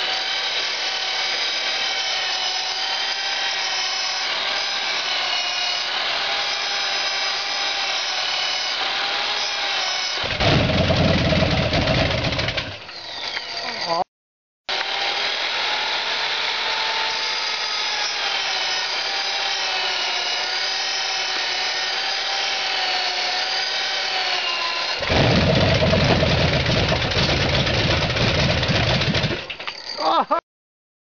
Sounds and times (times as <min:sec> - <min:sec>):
Idling: 0:10.4 - 0:12.8, 0:25.0 - 0:29.5.